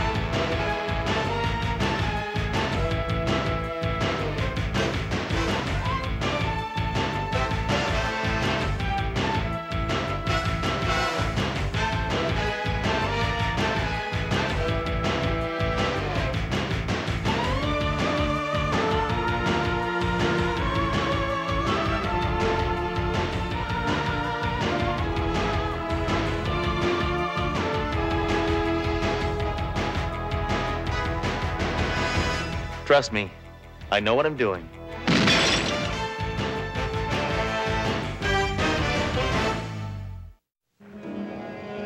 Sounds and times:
Music: 0:00.0 - 0:41.8.

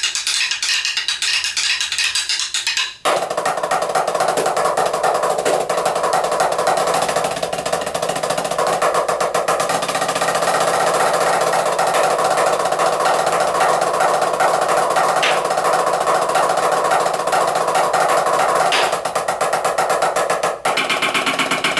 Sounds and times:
Drum: 0:00.0 - 0:21.8.

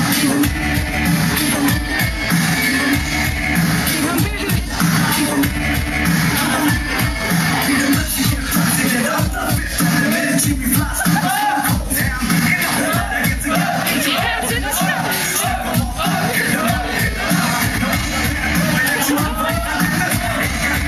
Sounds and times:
Music: 0:00.0 - 0:20.8.

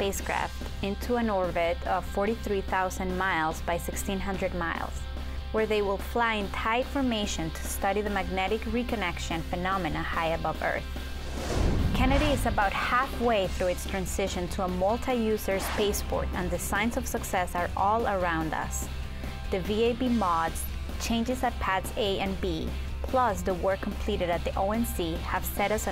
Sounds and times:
Speech: 0:00.0 - 0:05.0, 0:05.6 - 0:10.8, 0:12.0 - 0:18.9, 0:19.5 - 0:25.9
Music: 0:00.0 - 0:25.9.

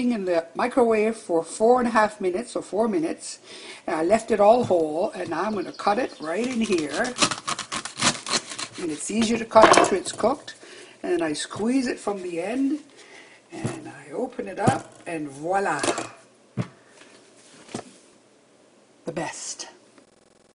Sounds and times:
Speech: 0:00.0 - 0:07.2, 0:08.8 - 0:12.9, 0:13.5 - 0:16.2, 0:19.1 - 0:19.8.

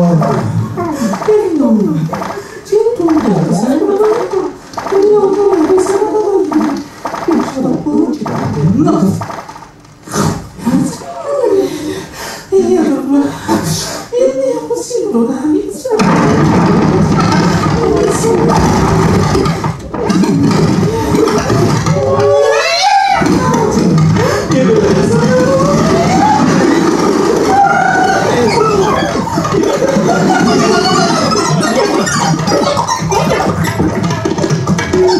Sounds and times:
Speech: 0:00.0 - 0:09.2, 0:12.5 - 0:16.1, 0:23.2 - 0:26.7.

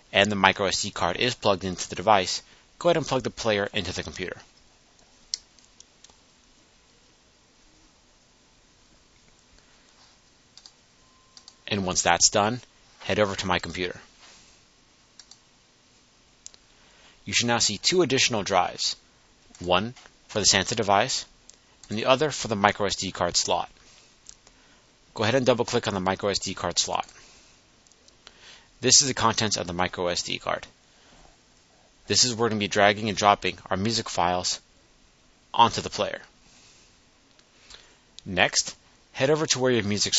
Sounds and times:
Speech: 0:00.1 - 0:04.5, 0:11.7 - 0:14.1, 0:17.3 - 0:19.0, 0:19.6 - 0:21.3, 0:21.9 - 0:23.8, 0:25.2 - 0:27.2, 0:28.8 - 0:30.8, 0:32.1 - 0:34.7, 0:35.6 - 0:36.3, 0:38.2 - 0:40.1.

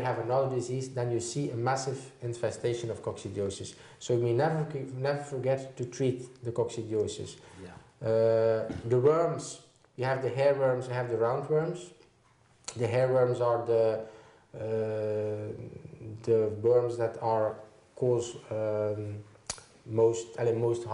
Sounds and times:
Speech: 0:00.0 - 0:12.0, 0:12.7 - 0:14.0, 0:14.6 - 0:19.3, 0:19.9 - 0:20.9
Inside, small room: 0:00.0 - 0:20.9.

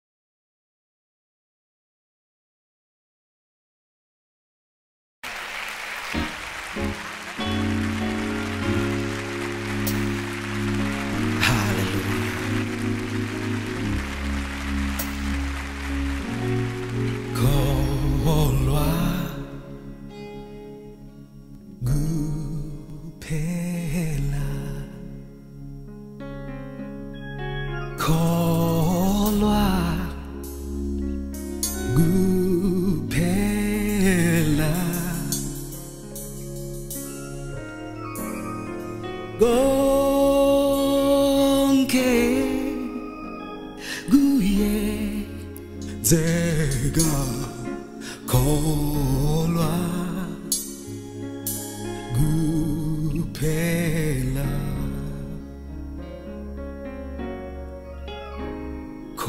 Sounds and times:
Gospel music: 0:05.2 - 0:59.2.

